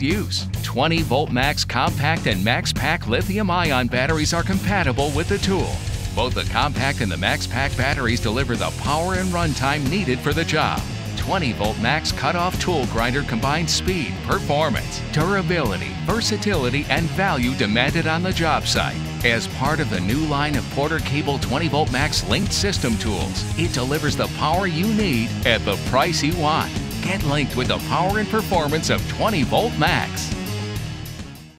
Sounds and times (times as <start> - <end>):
Speech: 0.0 - 30.4
Music: 0.0 - 31.5.